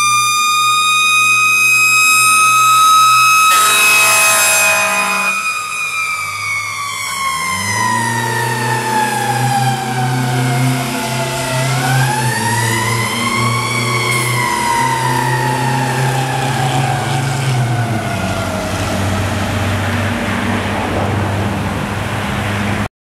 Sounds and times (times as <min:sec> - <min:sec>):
Truck: 0:00.0 - 0:22.9.